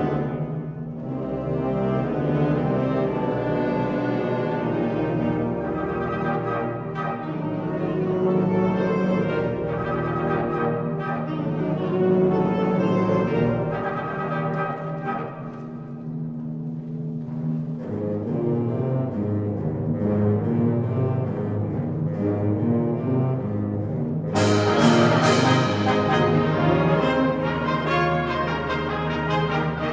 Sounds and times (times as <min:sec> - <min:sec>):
Classical music: 0:00.0 - 0:29.9
Inside, large room or hall: 0:00.0 - 0:29.9
Orchestra: 0:00.0 - 0:29.9.